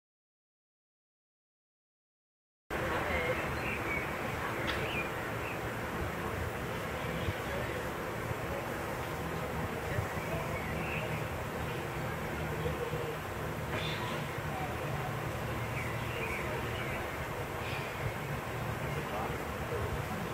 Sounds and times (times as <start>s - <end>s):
Speech: 2.7s - 5.1s, 6.0s - 17.6s, 18.6s - 20.3s.